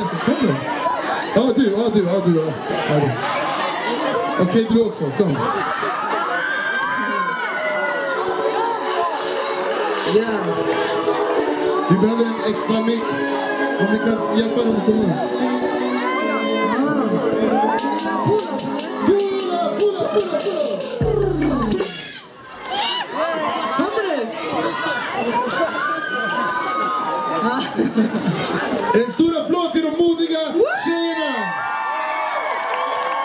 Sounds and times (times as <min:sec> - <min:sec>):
Music: 0:07.8 - 0:22.3.